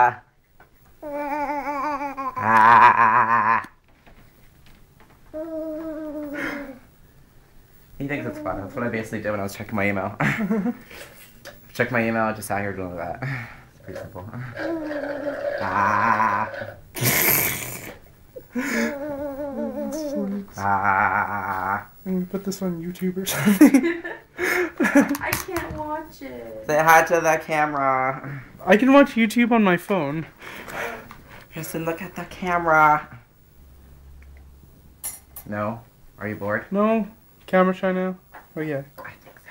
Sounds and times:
Male speech, man speaking: 8.0 - 10.2, 11.8 - 13.2, 13.8 - 14.4, 22.0 - 23.6, 26.7 - 30.3, 35.4 - 39.2.

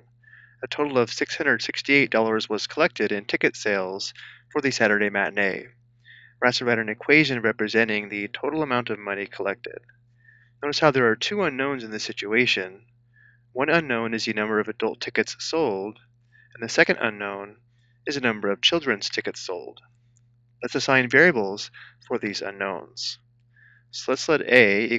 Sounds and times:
Speech: 0.6 - 9.8, 10.6 - 12.8, 13.6 - 16.0, 16.6 - 17.5, 18.1 - 19.8, 20.6 - 23.2, 24.0 - 24.9.

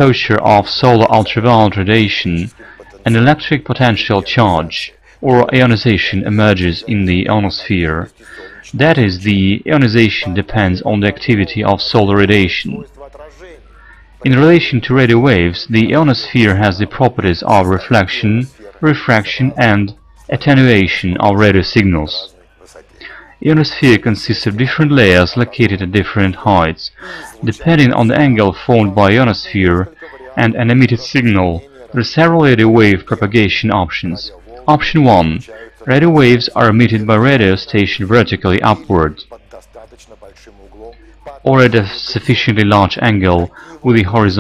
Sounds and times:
Speech: 0.0 - 44.4.

